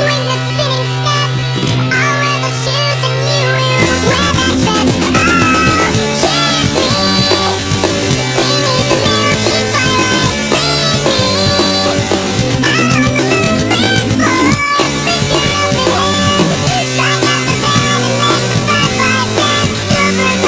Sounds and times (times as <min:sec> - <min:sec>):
Music: 0:00.0 - 0:20.4.